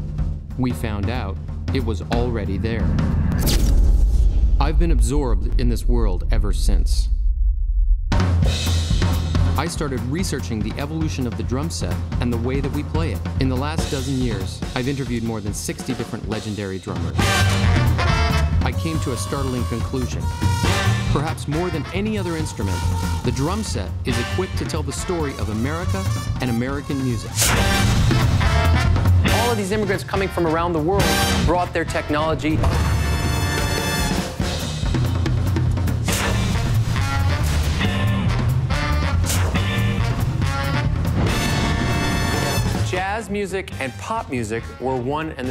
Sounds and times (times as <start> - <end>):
Music: 0.0 - 6.0, 7.1 - 45.5
Speech: 0.6 - 2.9, 4.6 - 7.1, 9.6 - 17.3, 18.6 - 27.7, 29.3 - 32.7, 42.8 - 45.5.